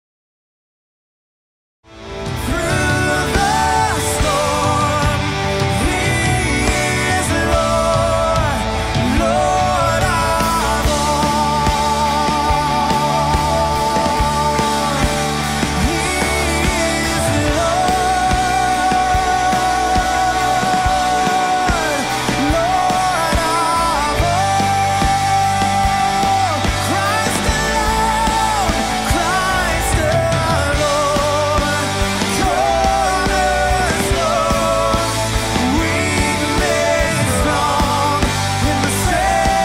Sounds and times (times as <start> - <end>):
Music: 1.8 - 39.6.